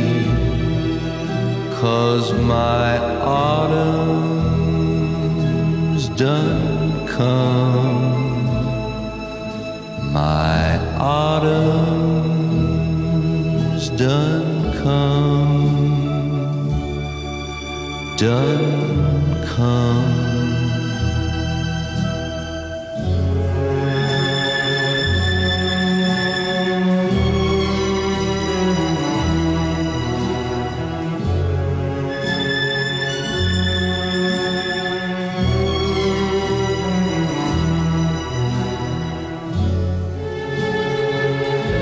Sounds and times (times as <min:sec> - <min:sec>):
Tender music: 0:00.0 - 0:41.8.